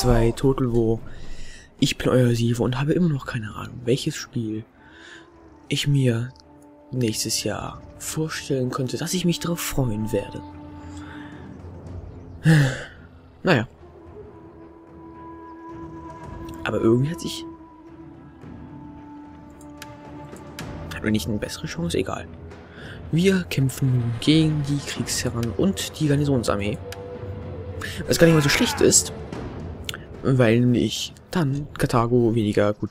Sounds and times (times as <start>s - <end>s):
Speech: 0.0s - 1.1s, 1.8s - 4.7s, 5.7s - 10.4s, 13.4s - 13.7s, 16.6s - 17.6s, 20.9s - 22.3s, 23.1s - 26.8s, 27.8s - 29.1s, 30.2s - 32.9s
Music: 0.0s - 32.9s.